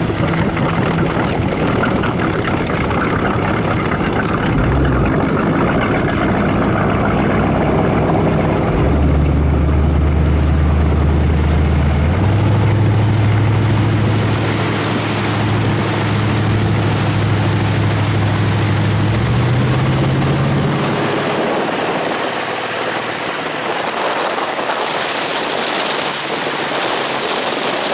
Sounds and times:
Motorboat, speedboat: 0:00.0 - 0:27.9.

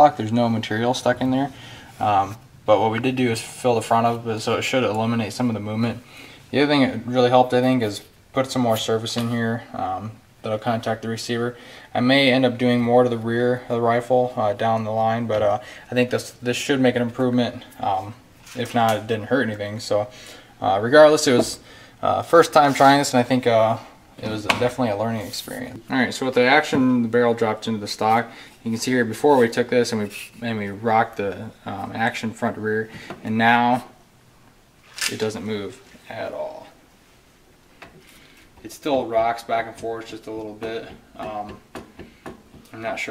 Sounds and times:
Speech: 0:00.0 - 0:34.0, 0:35.0 - 0:36.8, 0:38.6 - 0:41.7, 0:42.7 - 0:43.1
Inside, small room: 0:00.0 - 0:43.1.

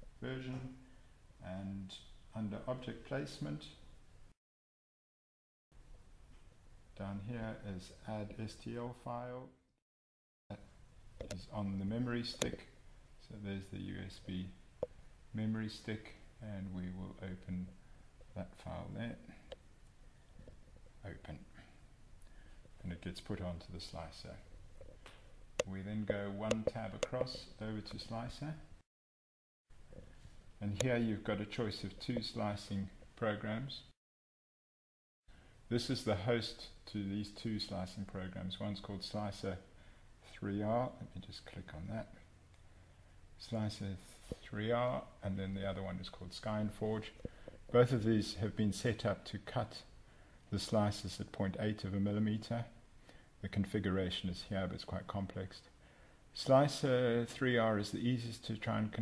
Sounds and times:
Speech: 0:00.0 - 0:03.9, 0:07.0 - 0:09.6, 0:10.5 - 0:14.6, 0:15.3 - 0:19.5, 0:21.0 - 0:21.8, 0:22.8 - 0:24.5, 0:25.6 - 0:28.8, 0:30.6 - 0:34.0, 0:35.7 - 0:42.3, 0:43.4 - 0:52.8, 0:53.4 - 0:55.8, 0:56.4 - 0:59.0.

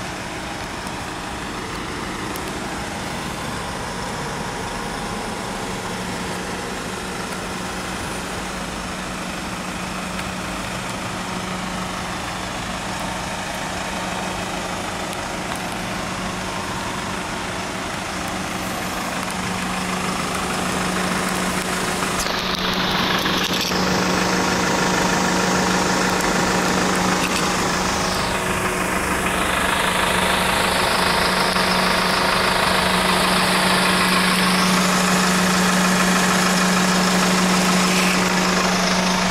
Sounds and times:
Truck: 0:00.0 - 0:39.3.

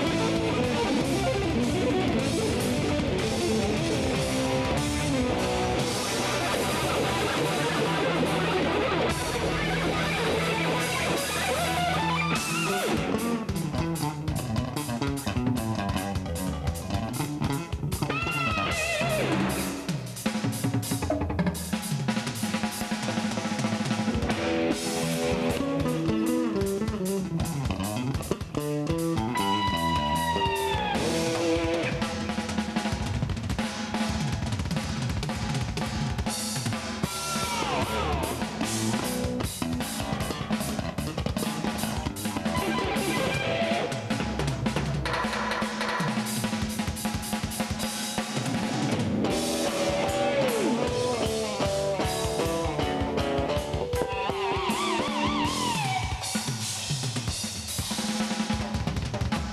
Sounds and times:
Bass guitar: 0:00.0 - 0:59.5.

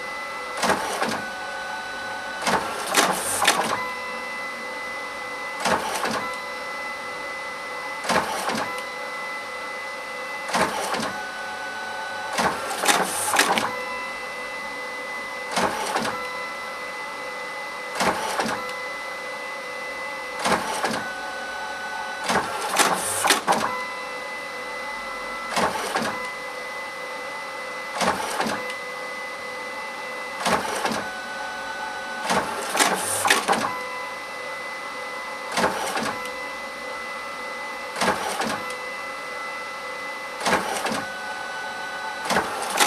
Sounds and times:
Printer: 0:00.0 - 0:42.8.

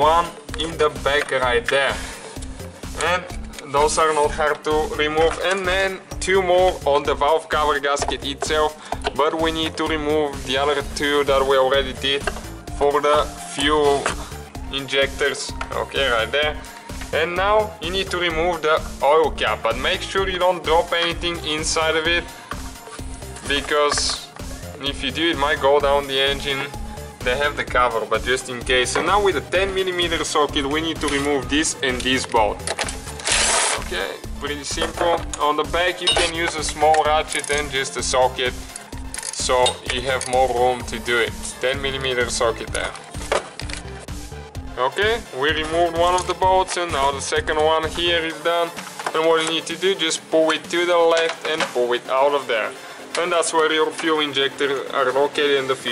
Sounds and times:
Speech: 0:00.0 - 0:02.0, 0:03.0 - 0:14.1, 0:14.7 - 0:22.2, 0:23.4 - 0:32.6, 0:33.8 - 0:38.6, 0:39.4 - 0:43.0, 0:44.8 - 0:55.9
Music: 0:00.0 - 0:55.9.

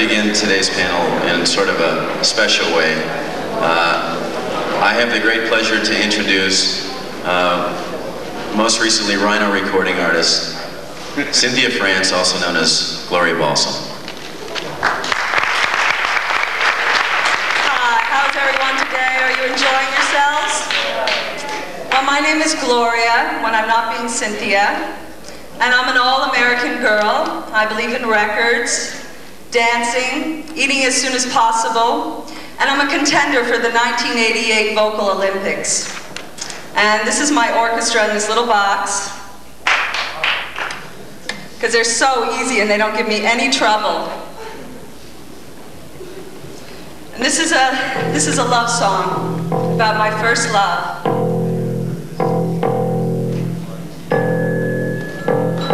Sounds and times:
Speech: 0:00.0 - 0:14.8, 0:17.6 - 0:36.0, 0:36.8 - 0:39.3, 0:40.9 - 0:44.8, 0:47.1 - 0:49.2, 0:49.8 - 0:51.0.

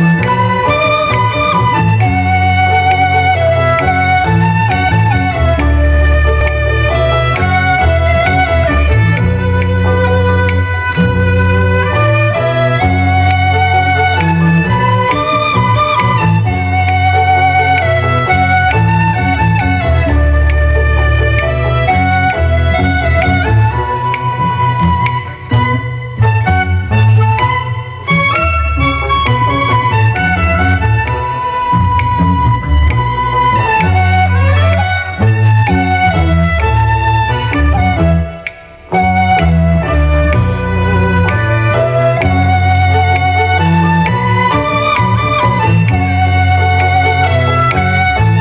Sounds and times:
Wind instrument, woodwind instrument: 0:00.0 - 0:48.4.

